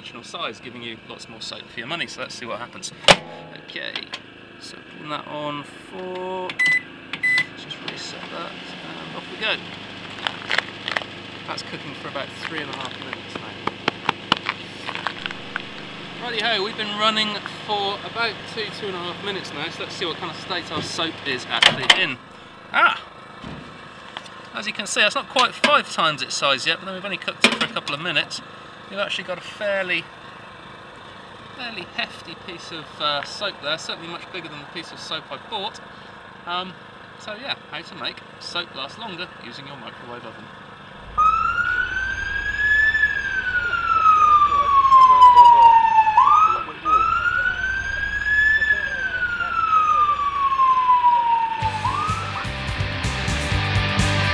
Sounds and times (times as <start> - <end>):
Speech: 0.0 - 3.0, 3.6 - 6.6, 7.6 - 9.6, 11.5 - 13.6, 16.2 - 23.0, 24.5 - 30.1, 31.6 - 35.8, 36.4 - 40.5, 43.6 - 50.4
Police car (siren): 41.0 - 52.8.